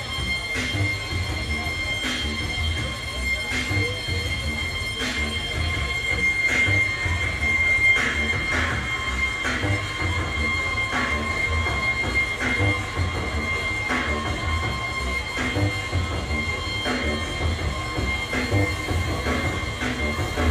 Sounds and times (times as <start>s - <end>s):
Music: 0.0s - 20.5s
Speech: 0.0s - 20.5s.